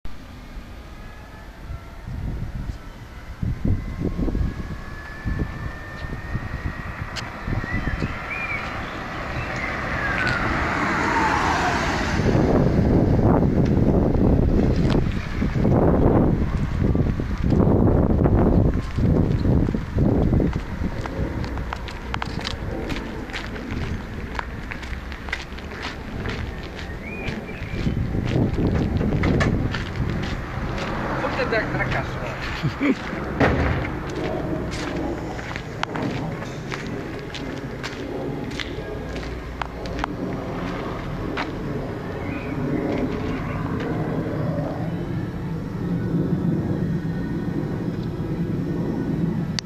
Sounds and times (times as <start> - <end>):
Speech: 31.2 - 33.0.